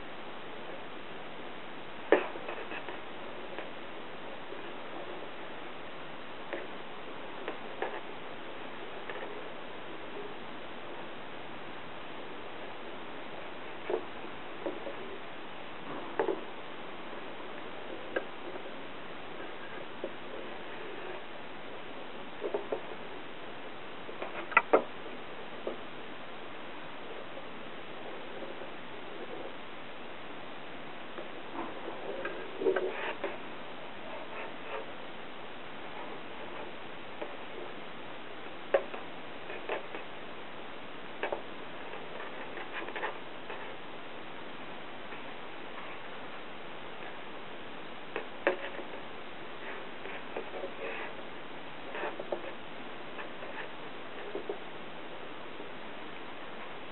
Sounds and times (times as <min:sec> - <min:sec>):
Rustle: 0:00.0 - 0:56.9.